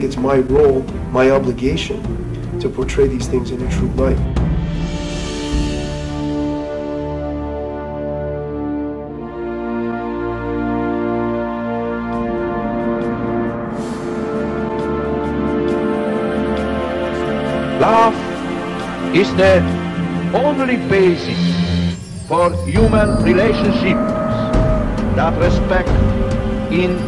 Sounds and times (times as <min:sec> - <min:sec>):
Speech: 0:00.0 - 0:04.2, 0:19.2 - 0:19.7, 0:20.4 - 0:21.6, 0:22.3 - 0:24.5, 0:25.2 - 0:26.0, 0:26.7 - 0:27.0
Music: 0:00.0 - 0:27.0.